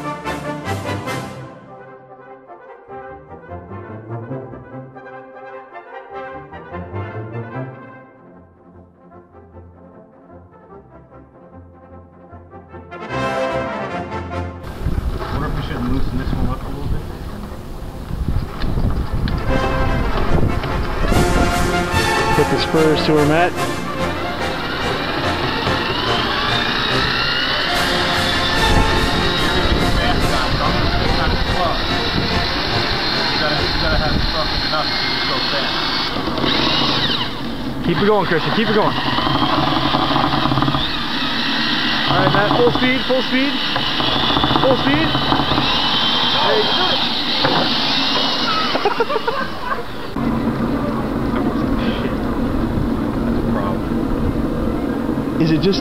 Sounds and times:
Music: 0:00.0 - 0:36.1
Outside, urban or manmade: 0:00.0 - 0:55.8
Speech: 0:15.4 - 0:17.6, 0:22.4 - 0:23.6, 0:37.9 - 0:39.0, 0:42.1 - 0:43.6, 0:44.6 - 0:45.1, 0:55.4 - 0:55.8.

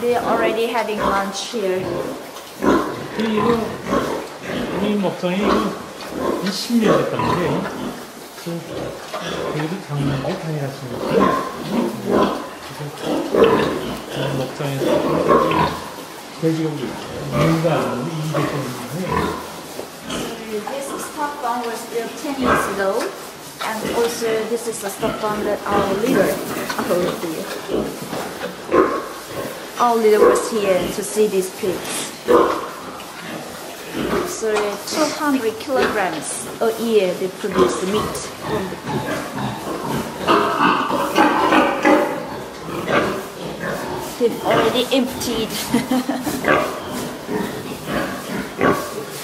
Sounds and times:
Oink: 0:00.0 - 0:49.2.

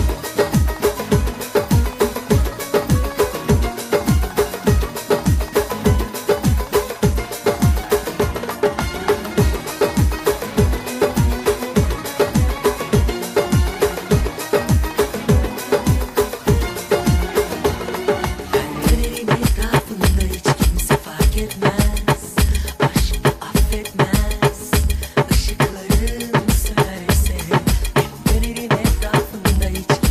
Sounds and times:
Music: 0:00.0 - 0:30.1.

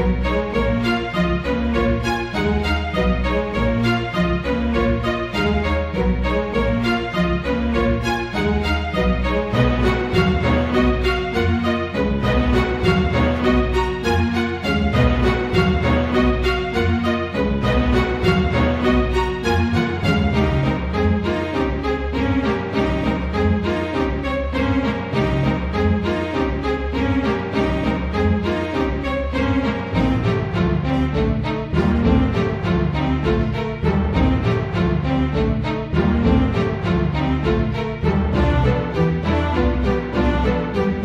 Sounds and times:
Musical instrument: 0:00.0 - 0:41.0.

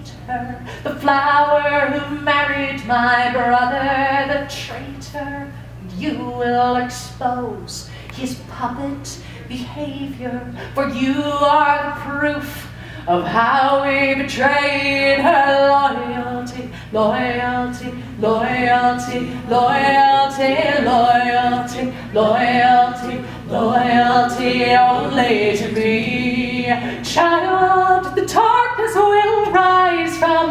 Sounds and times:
Inside, large room or hall: 0:00.0 - 0:30.5
Singing: 0:09.5 - 0:30.5.

